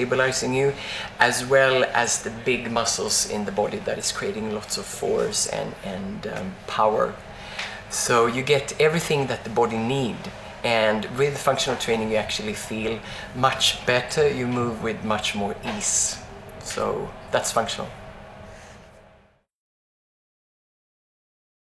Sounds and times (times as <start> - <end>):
Speech: 0.0 - 7.2, 7.9 - 18.0.